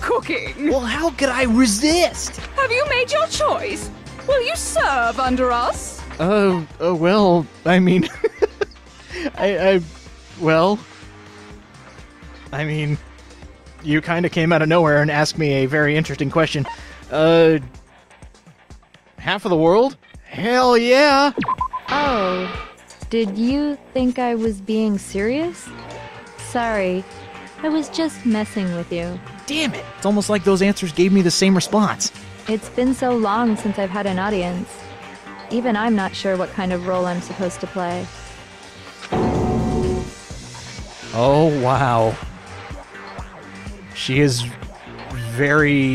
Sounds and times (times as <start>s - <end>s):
Speech: 0.0s - 8.1s, 9.2s - 10.8s, 12.6s - 13.0s, 13.9s - 17.7s, 19.2s - 22.4s, 23.1s - 25.7s, 26.5s - 27.0s, 27.7s - 34.7s, 35.6s - 38.1s, 41.1s - 42.2s, 44.0s - 44.6s, 45.2s - 45.9s
Music: 0.0s - 45.9s.